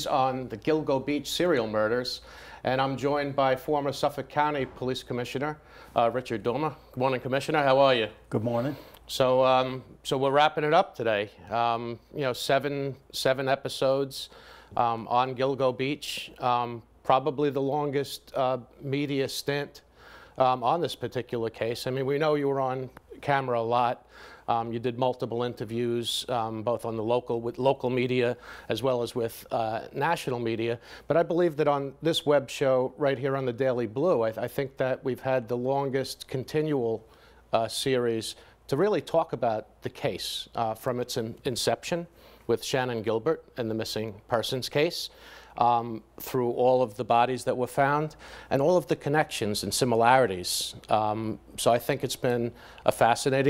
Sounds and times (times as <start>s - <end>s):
Speech: 0.0s - 19.8s, 20.4s - 53.5s.